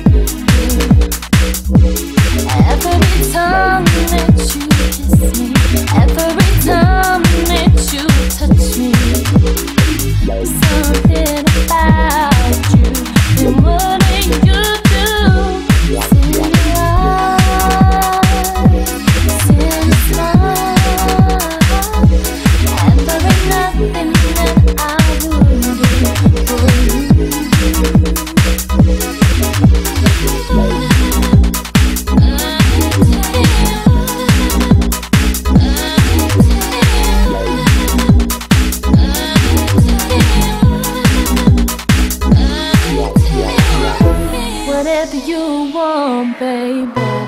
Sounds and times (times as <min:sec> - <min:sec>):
Trance music: 0:00.0 - 0:47.2.